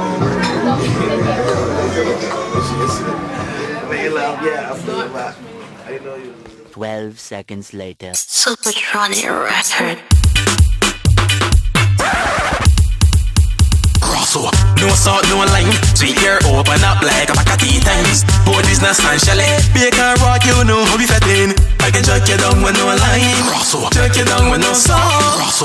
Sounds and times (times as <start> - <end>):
Music: 0.0 - 3.8, 9.2 - 25.6
Speech: 0.4 - 10.0.